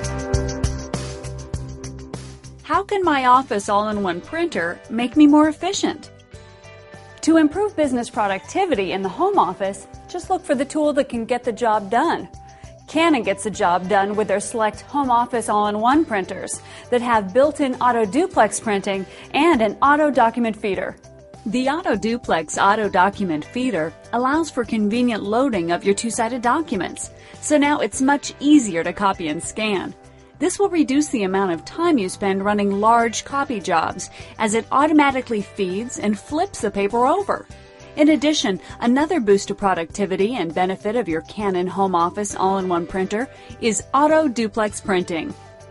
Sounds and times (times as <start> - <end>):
Music: 0.0 - 45.7
Speech: 2.7 - 6.1, 7.2 - 12.3, 12.9 - 37.4, 38.0 - 45.3.